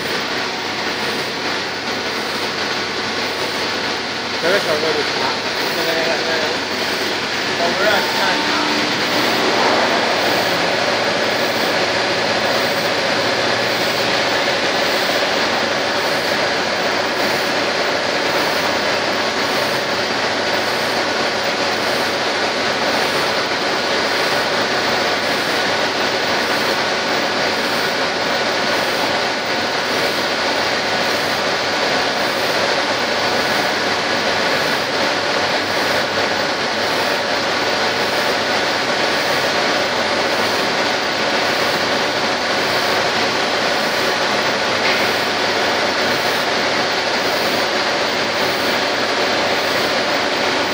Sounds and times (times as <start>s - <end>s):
Pump (liquid): 0.0s - 50.7s.